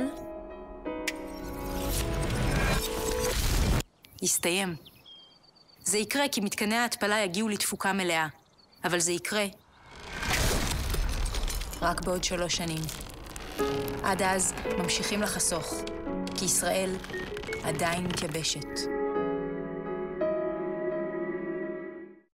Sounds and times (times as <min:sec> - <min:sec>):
Music: 0:00.0 - 0:03.5, 0:13.2 - 0:22.3
Speech: 0:04.2 - 0:04.8, 0:05.8 - 0:09.6, 0:11.8 - 0:12.9, 0:14.0 - 0:17.0, 0:17.6 - 0:18.9.